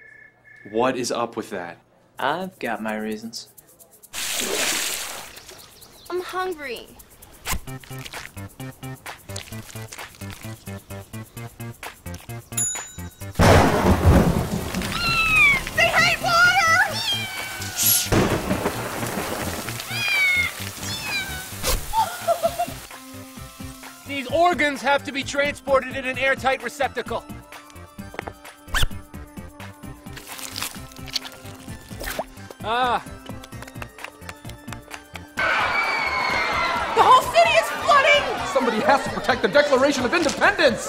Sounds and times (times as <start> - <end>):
Music: 2.2 - 4.8, 5.6 - 40.8.